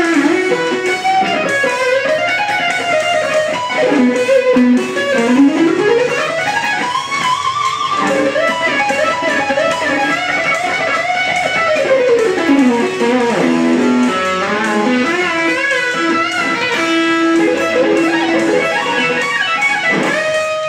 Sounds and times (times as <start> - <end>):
Guitar: 0.0 - 20.6.